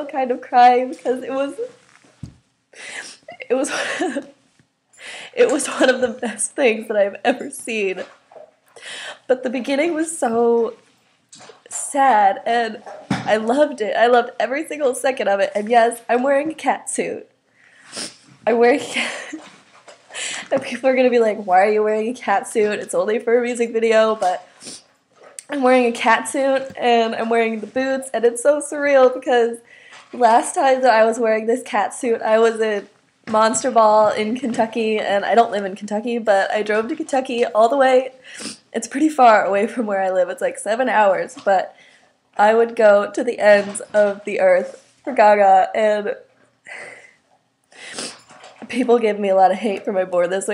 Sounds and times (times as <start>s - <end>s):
Speech: 0.0s - 1.8s, 3.3s - 4.2s, 5.4s - 8.1s, 9.3s - 10.8s, 11.7s - 17.3s, 18.5s - 19.4s, 20.5s - 24.4s, 25.4s - 38.2s, 38.8s - 41.7s, 42.4s - 46.2s, 48.6s - 50.5s.